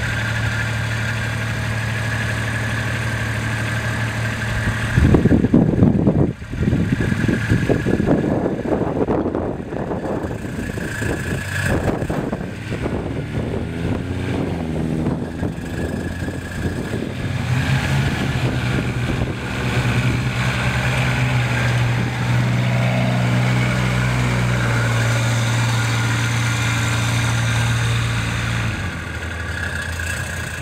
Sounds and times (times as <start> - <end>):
Truck: 0.0 - 30.6.